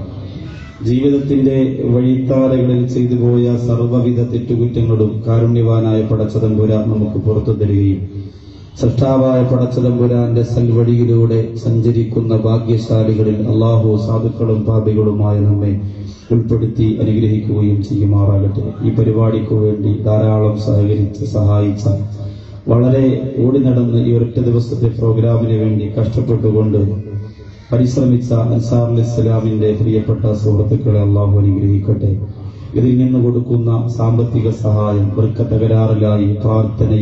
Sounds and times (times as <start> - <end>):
Male speech, man speaking: 0.0 - 8.1, 8.7 - 37.0
Narration, monologue: 0.0 - 37.0.